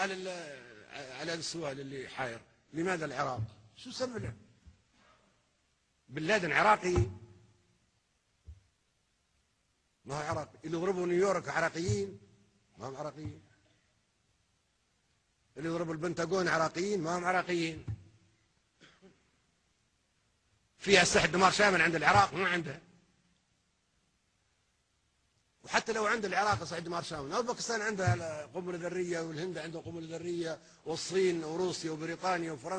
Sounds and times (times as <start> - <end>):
Male speech, man speaking: 0.0 - 4.5, 6.1 - 7.2, 10.0 - 12.2, 12.8 - 13.5, 15.6 - 18.0, 20.8 - 22.9, 25.6 - 32.7.